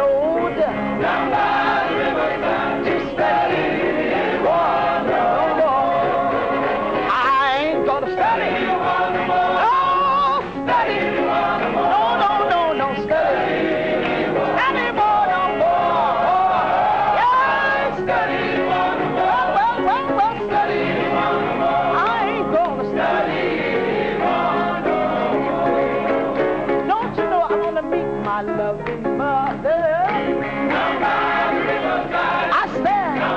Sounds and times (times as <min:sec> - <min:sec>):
Music: 0:00.0 - 0:33.3.